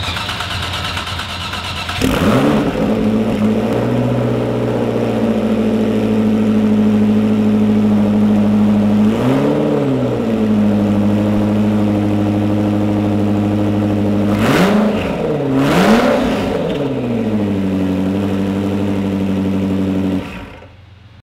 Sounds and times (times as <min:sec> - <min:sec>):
Vehicle: 0:00.0 - 0:21.2
Accelerating, revving, vroom: 0:02.0 - 0:05.8, 0:08.9 - 0:10.2, 0:14.3 - 0:17.0.